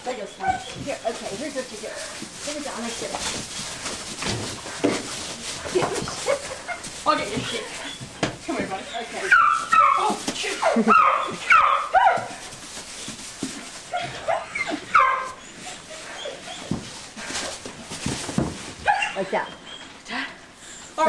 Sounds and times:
Speech: 0.0s - 3.3s, 7.0s - 7.8s, 8.4s - 10.8s.

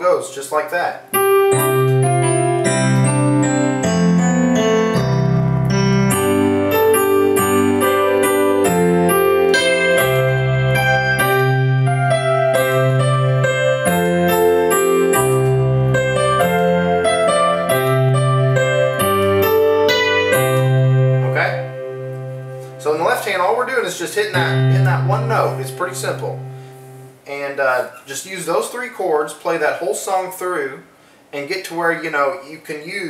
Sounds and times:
Electric piano: 1.0s - 27.3s.

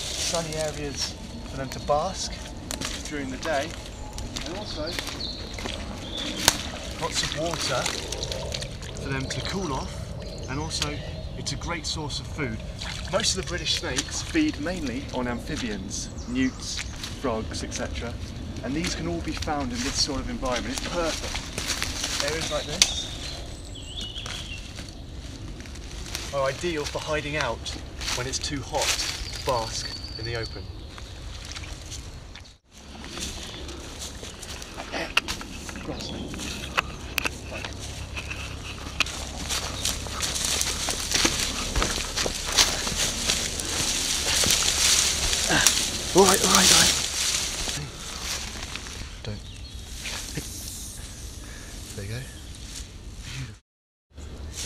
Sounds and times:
Animal: 0.0s - 25.0s, 32.9s - 48.3s
Speech: 0.2s - 2.4s, 3.0s - 3.8s, 4.4s - 5.0s, 7.0s - 8.0s, 9.0s - 21.3s, 22.2s - 22.9s, 26.3s - 30.7s, 35.8s - 36.3s, 45.5s - 47.0s, 49.2s - 49.5s, 51.9s - 52.4s
Water: 5.5s - 10.4s, 11.4s - 15.6s
Trickle, dribble: 6.4s - 9.4s, 12.5s - 14.6s.

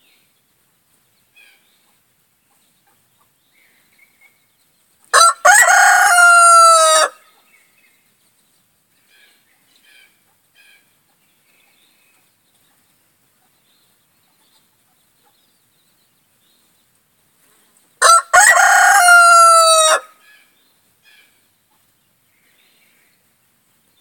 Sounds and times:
Crowing, cock-a-doodle-doo: 5.1s - 7.2s, 18.0s - 20.2s.

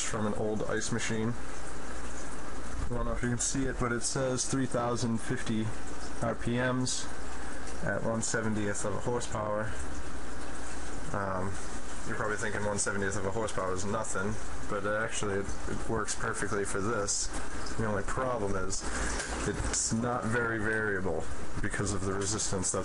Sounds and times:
Speech: 0.0s - 1.4s, 2.8s - 7.1s, 7.8s - 9.8s, 11.1s - 22.8s.

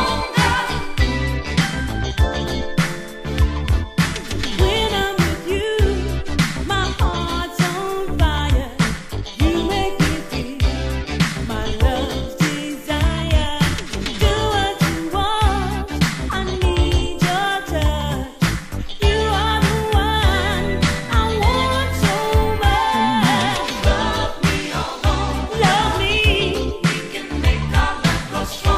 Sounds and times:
Funk: 0.0s - 28.7s.

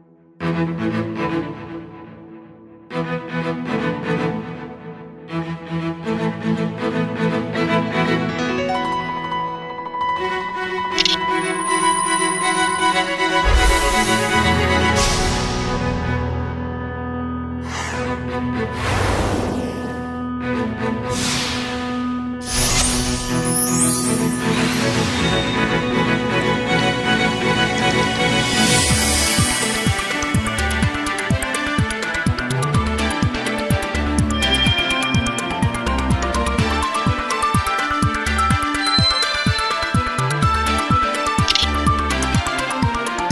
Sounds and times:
Music: 0.0s - 43.3s.

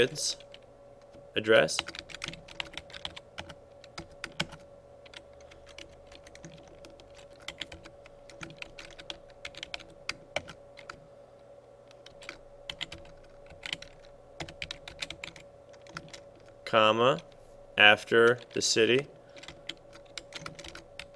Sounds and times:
Speech: 0.0s - 0.4s, 1.4s - 1.9s, 16.7s - 19.1s
Typing: 1.7s - 11.0s, 11.9s - 16.6s, 19.3s - 21.1s.

